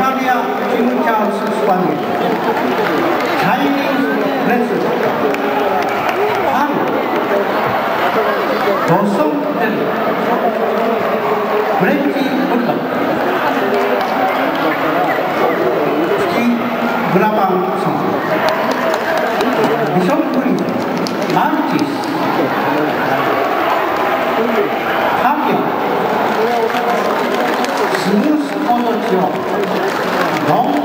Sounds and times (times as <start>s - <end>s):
Speech: 0.0s - 2.6s, 3.4s - 18.2s, 19.4s - 23.4s, 24.3s - 30.8s.